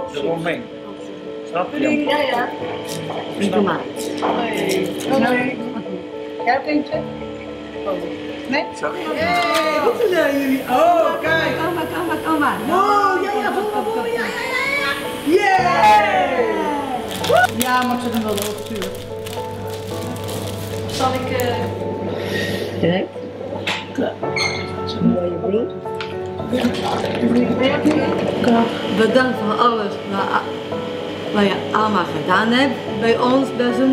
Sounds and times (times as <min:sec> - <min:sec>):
Music: 0:00.0 - 0:33.9.